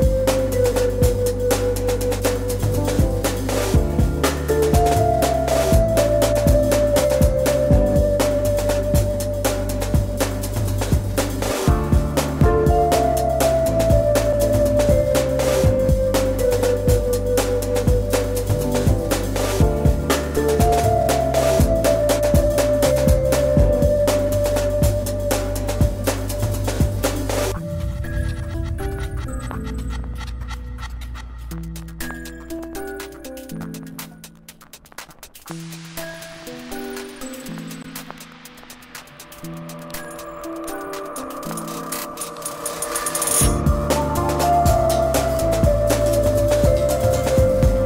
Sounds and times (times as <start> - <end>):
Music: 0.0 - 47.8.